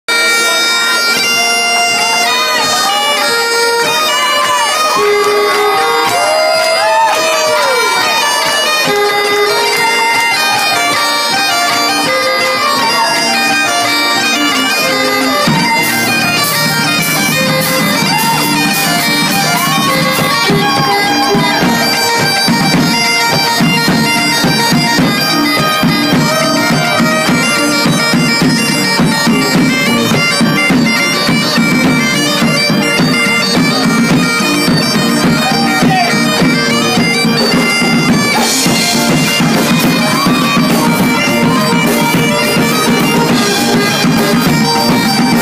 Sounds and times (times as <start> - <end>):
Bagpipes: 0.1 - 45.4
Wind instrument, woodwind instrument: 0.1 - 45.4.